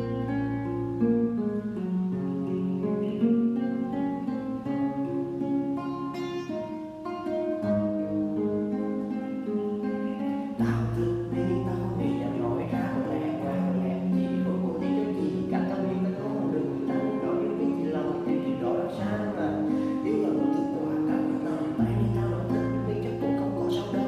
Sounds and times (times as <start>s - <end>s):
Acoustic guitar: 0.0s - 24.0s.